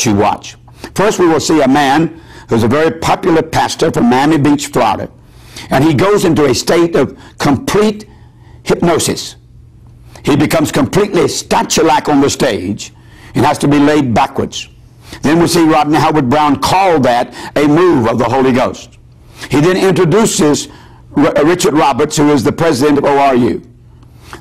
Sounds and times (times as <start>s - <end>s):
Speech: 0.0s - 9.4s, 10.2s - 23.7s.